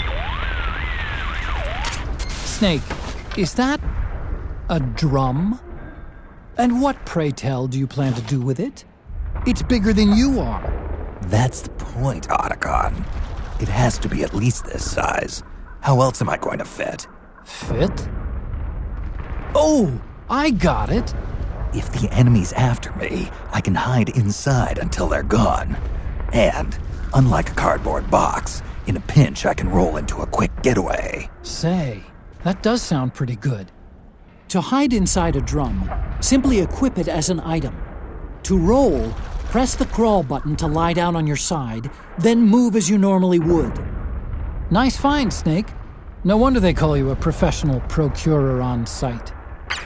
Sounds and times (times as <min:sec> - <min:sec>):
Speech: 0:02.4 - 0:03.8, 0:04.7 - 0:05.6, 0:06.6 - 0:08.8, 0:09.5 - 0:13.0, 0:13.6 - 0:18.1, 0:19.6 - 0:21.1, 0:21.8 - 0:33.7, 0:34.5 - 0:37.8, 0:38.4 - 0:43.8, 0:44.7 - 0:49.3.